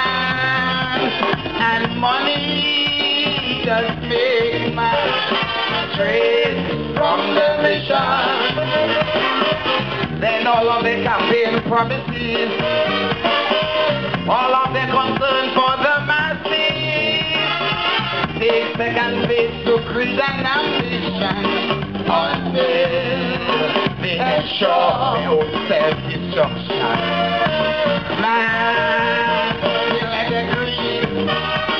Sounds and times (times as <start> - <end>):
Music: 0.0 - 31.7.